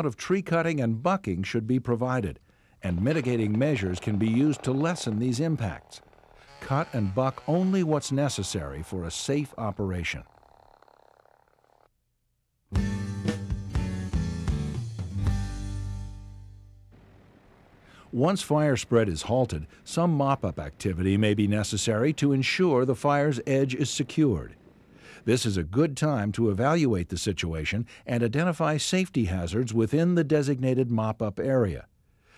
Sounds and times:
Speech: 0:00.0 - 0:06.0, 0:06.6 - 0:10.3, 0:18.1 - 0:24.6, 0:25.2 - 0:31.9
Music: 0:12.7 - 0:16.9.

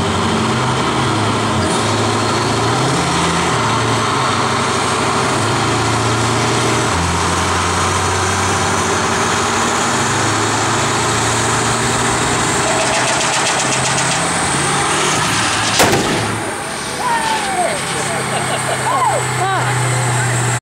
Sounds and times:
Vehicle: 0:00.0 - 0:20.6
Speech: 0:17.0 - 0:20.6.

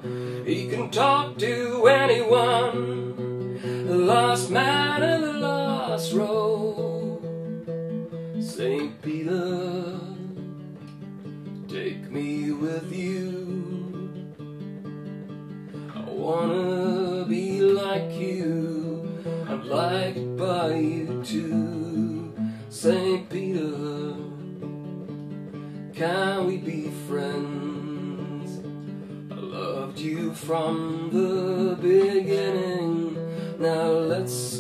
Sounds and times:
Acoustic guitar: 0:00.0 - 0:34.6.

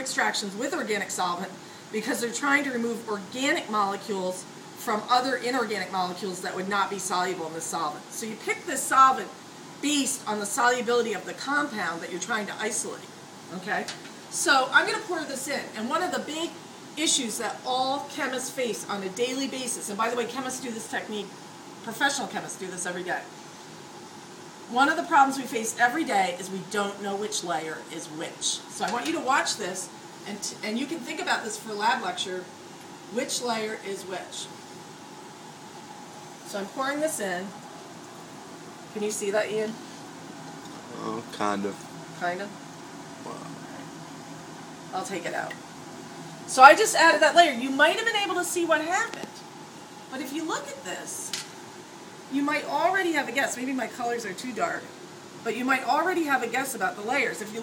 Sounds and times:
Speech: 0:00.0 - 0:21.3, 0:21.9 - 0:23.3, 0:24.7 - 0:32.5, 0:33.2 - 0:34.5, 0:40.9 - 0:42.5, 0:45.0 - 0:45.6, 0:46.5 - 0:49.4, 0:50.1 - 0:51.4, 0:52.3 - 0:54.9, 0:55.5 - 0:57.6.

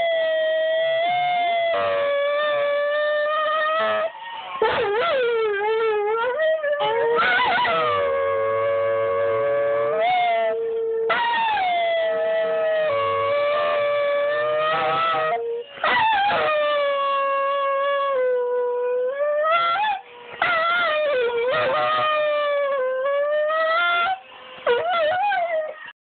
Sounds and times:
Whimper (dog): 0:00.0 - 0:25.9
Howl: 0:00.0 - 0:26.0.

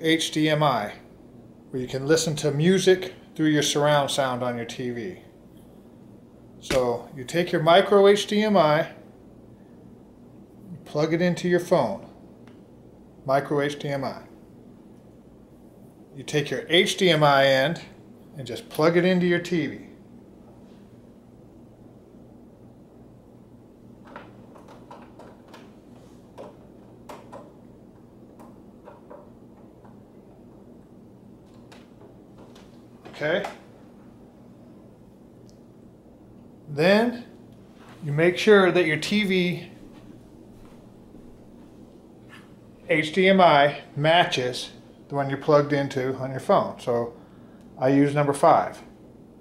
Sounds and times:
Speech: 0:00.0 - 0:01.1, 0:01.7 - 0:05.3, 0:06.6 - 0:09.0, 0:10.7 - 0:12.2, 0:13.2 - 0:14.4, 0:16.2 - 0:20.0, 0:33.1 - 0:33.6, 0:36.7 - 0:37.4, 0:38.0 - 0:39.8, 0:42.9 - 0:47.2, 0:47.8 - 0:48.9.

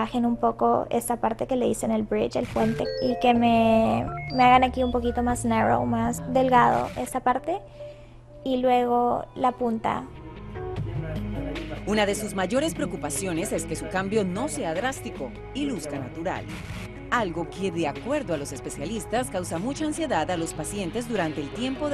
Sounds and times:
Speech: 0:00.0 - 0:07.6, 0:08.5 - 0:10.1, 0:11.9 - 0:16.4, 0:17.2 - 0:21.9
Music: 0:00.0 - 0:21.9.

